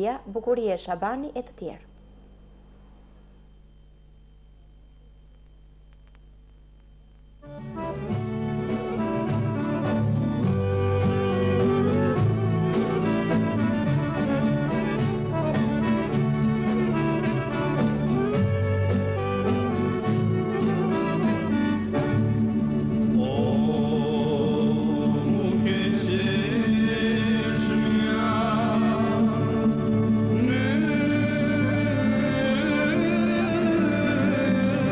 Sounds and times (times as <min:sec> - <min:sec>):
Music: 0:07.4 - 0:34.9.